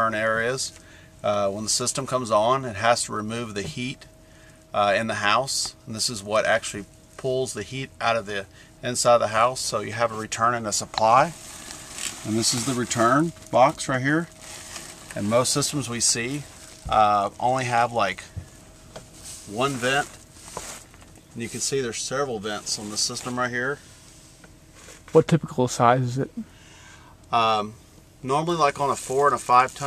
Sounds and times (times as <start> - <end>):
Speech: 0.0 - 4.1, 4.8 - 11.4, 12.2 - 14.4, 15.2 - 18.3, 19.5 - 20.2, 21.4 - 23.8, 25.1 - 26.4, 27.3 - 29.8.